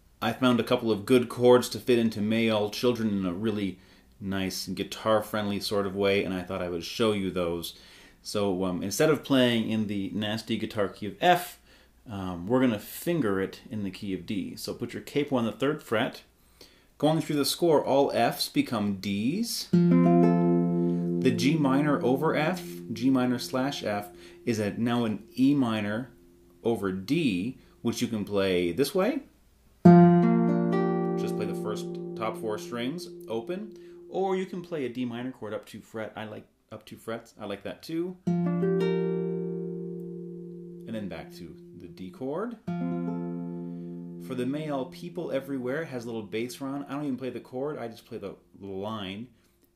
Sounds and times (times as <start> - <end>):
Speech: 0.2 - 16.3, 17.0 - 19.8, 21.2 - 29.3, 31.2 - 38.2, 40.9 - 42.6, 44.3 - 49.4
Acoustic guitar: 19.7 - 26.5, 29.8 - 34.7, 38.2 - 45.5
Strum: 19.7 - 26.6, 29.8 - 34.6, 38.3 - 45.3.